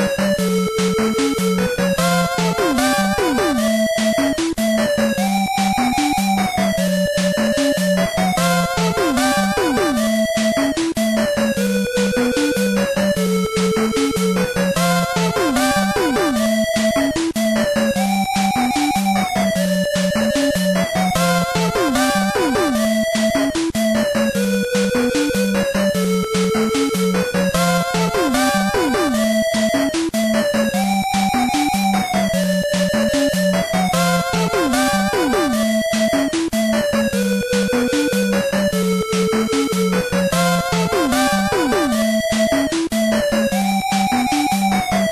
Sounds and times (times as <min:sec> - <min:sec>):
Video game music: 0:00.0 - 0:45.1.